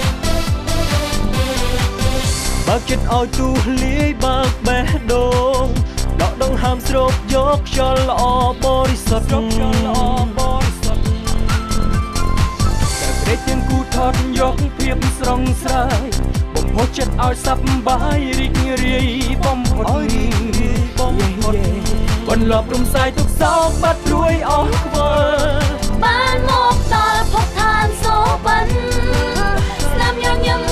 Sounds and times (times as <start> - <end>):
Soundtrack music: 0.0 - 30.7.